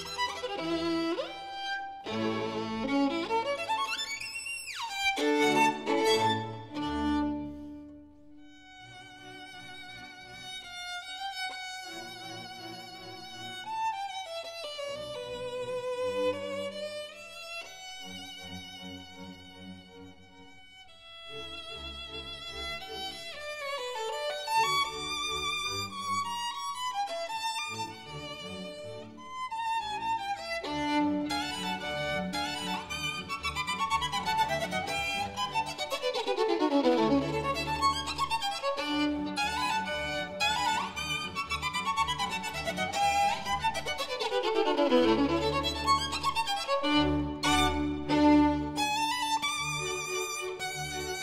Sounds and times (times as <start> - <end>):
Violin, fiddle: 0.0 - 51.2.